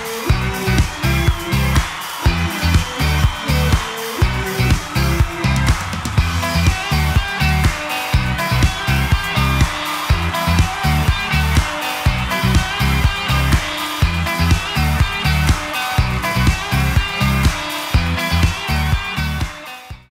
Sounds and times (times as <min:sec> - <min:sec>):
Exciting music: 0:00.0 - 0:20.1.